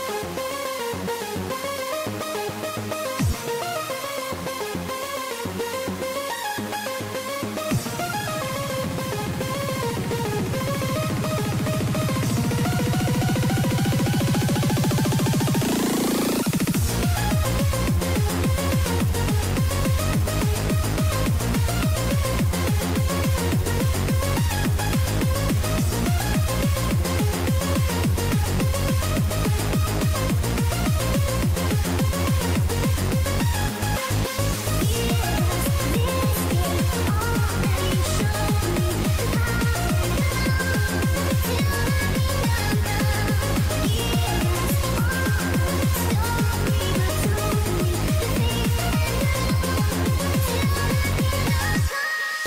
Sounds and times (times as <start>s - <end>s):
Music: 0.0s - 52.4s.